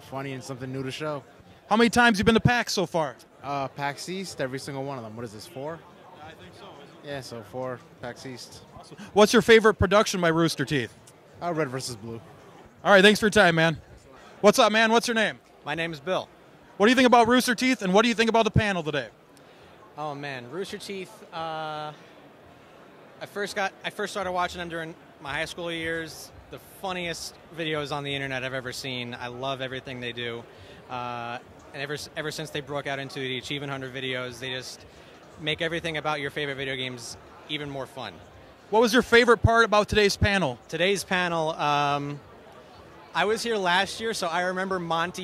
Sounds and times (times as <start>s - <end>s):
Speech: 0.0s - 19.1s, 23.2s - 34.8s, 35.4s - 45.2s.